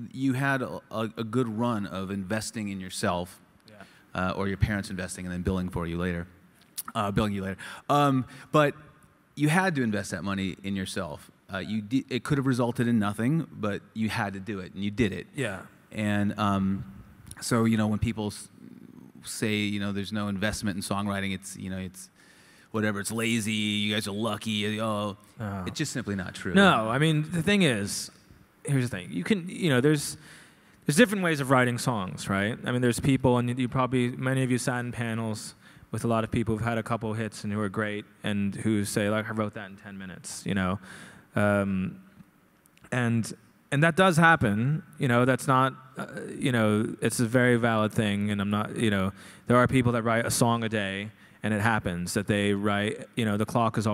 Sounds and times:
Speech: 0.0 - 8.8, 9.4 - 22.1, 22.7 - 30.2, 30.9 - 40.8, 41.4 - 42.1, 42.9 - 53.9.

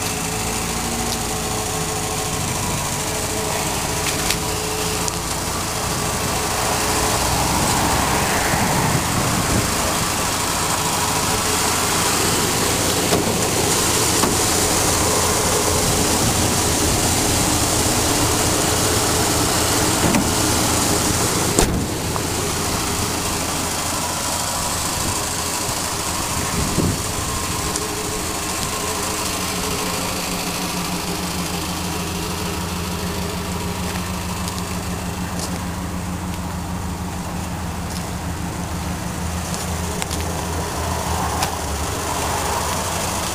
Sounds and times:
Vehicle: 0.0 - 43.3.

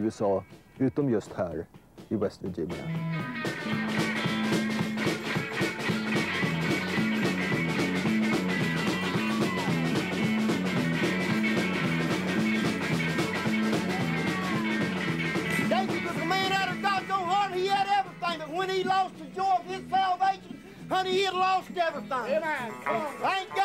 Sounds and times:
Music: 0.0 - 23.6.

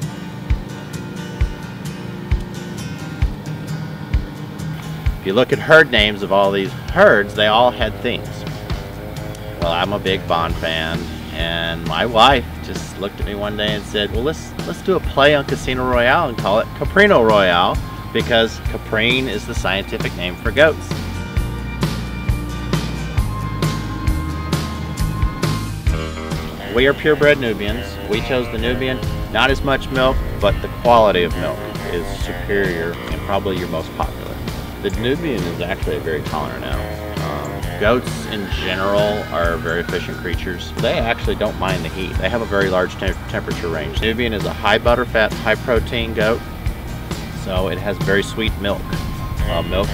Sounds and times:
Music: 0.0 - 49.9
Speech: 5.2 - 8.4, 9.6 - 20.9, 26.6 - 46.4, 47.4 - 49.9.

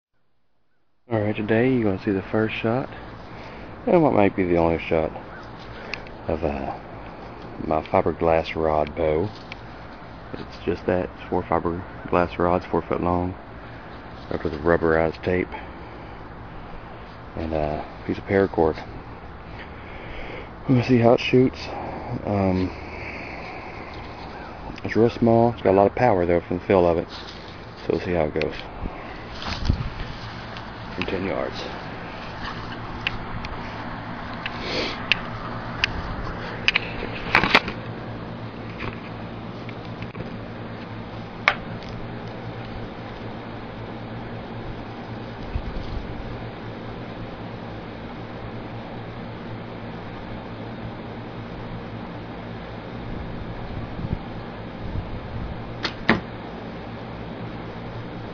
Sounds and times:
Speech: 1.1 - 3.0, 3.8 - 5.3, 6.3 - 6.8, 7.6 - 9.4, 10.4 - 13.4, 14.3 - 15.6, 17.4 - 18.9, 20.6 - 22.8, 24.8 - 27.1, 27.8 - 28.7, 30.9 - 31.8.

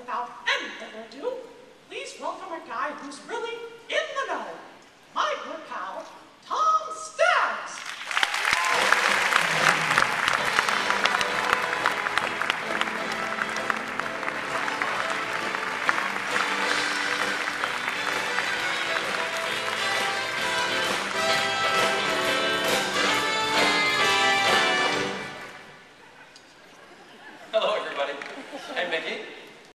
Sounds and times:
Music: 8.8 - 25.7.

